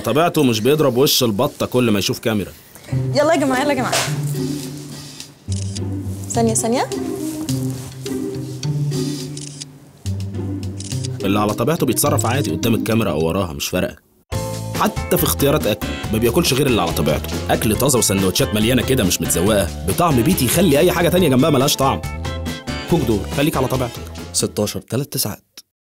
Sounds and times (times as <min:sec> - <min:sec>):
Music: 0:00.0 - 0:13.5, 0:14.3 - 0:24.8
Speech: 0:11.2 - 0:14.0, 0:22.9 - 0:25.7.